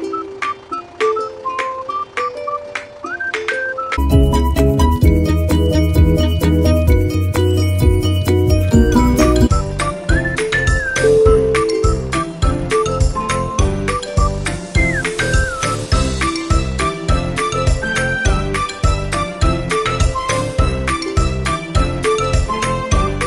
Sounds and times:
Music: 0.0s - 23.2s.

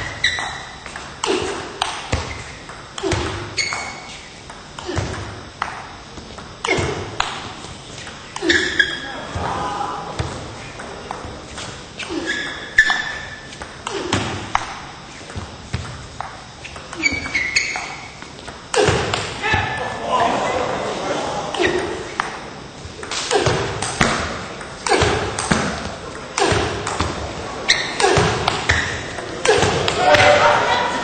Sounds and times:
Speech: 19.4s - 21.8s, 29.3s - 31.0s.

